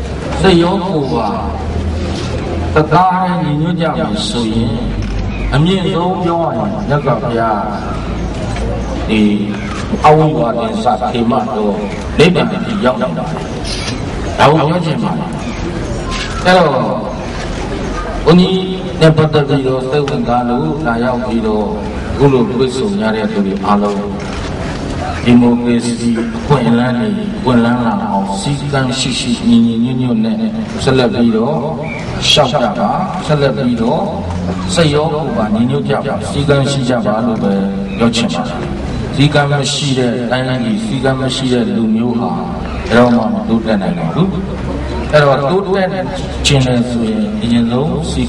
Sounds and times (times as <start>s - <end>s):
Narration, monologue: 0.0s - 48.2s
Male speech, man speaking: 0.4s - 1.6s, 2.8s - 8.0s, 9.1s - 13.4s, 14.4s - 15.4s, 16.4s - 17.2s, 18.2s - 24.2s, 25.1s - 44.5s, 45.1s - 48.2s.